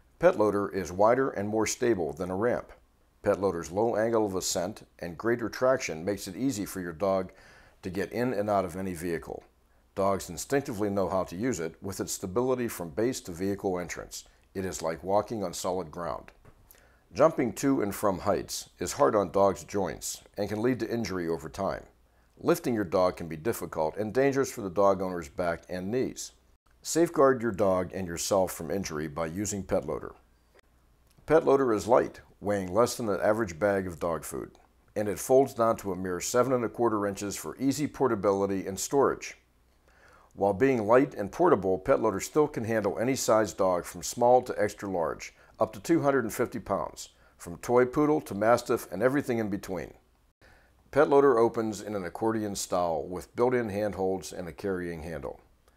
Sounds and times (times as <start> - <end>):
Speech: 0.2 - 16.4, 17.1 - 30.2, 31.2 - 39.4, 40.4 - 50.0, 50.9 - 55.5.